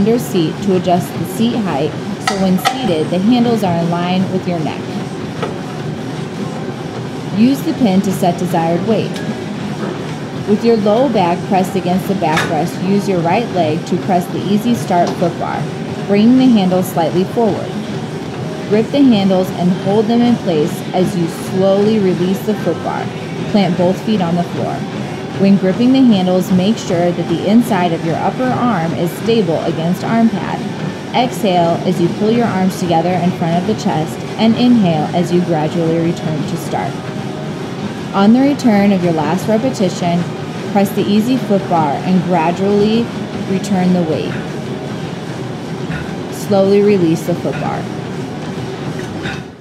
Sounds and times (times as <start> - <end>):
Speech: 0.0 - 5.0, 7.4 - 9.2, 10.5 - 17.8, 18.7 - 37.0, 38.1 - 44.4, 46.3 - 48.0.